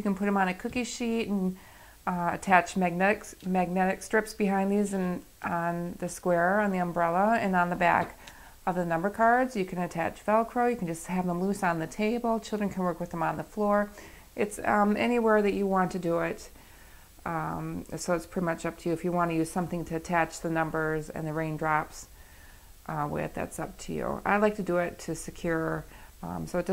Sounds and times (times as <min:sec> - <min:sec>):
Speech: 0:00.0 - 0:16.6, 0:17.2 - 0:22.1, 0:22.9 - 0:26.7.